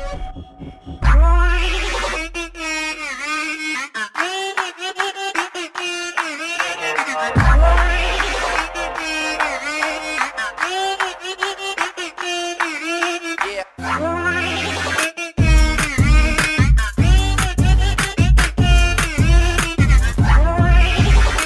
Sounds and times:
Music: 0:00.0 - 0:02.9, 0:06.2 - 0:21.4.

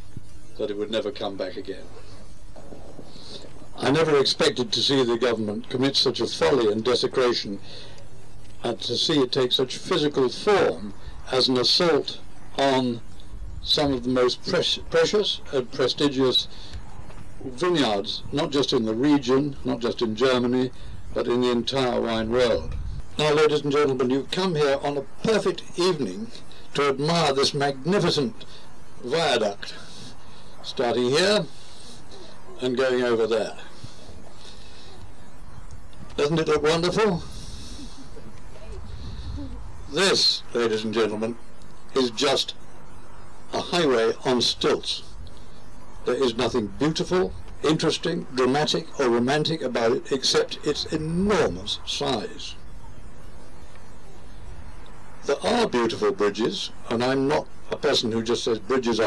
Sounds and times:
Narration, monologue: 0:00.0 - 0:59.0
Male speech, man speaking: 0:00.6 - 0:01.9, 0:03.8 - 0:07.6, 0:08.6 - 0:13.0, 0:13.7 - 0:16.5, 0:17.4 - 0:28.4, 0:29.0 - 0:29.8, 0:30.6 - 0:31.5, 0:32.6 - 0:33.7, 0:36.2 - 0:37.3, 0:39.9 - 0:41.4, 0:42.0 - 0:42.6, 0:43.5 - 0:45.1, 0:46.0 - 0:52.6, 0:55.2 - 0:59.0.

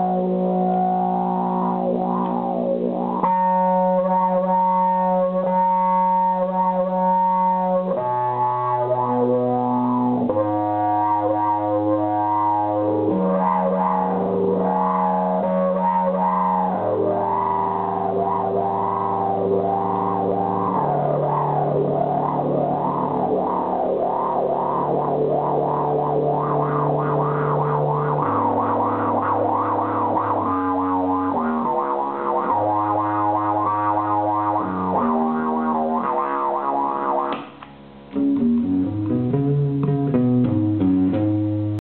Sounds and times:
Guitar: 0:00.0 - 0:41.8.

